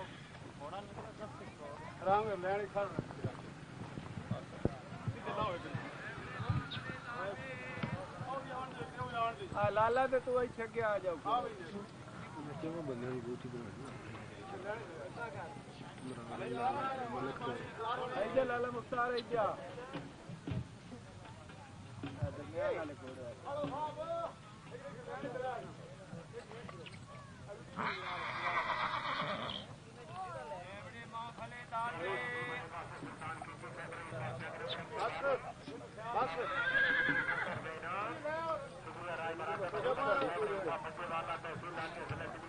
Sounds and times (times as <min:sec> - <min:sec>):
Neigh, whinny: 0:27.8 - 0:29.8, 0:36.2 - 0:37.7.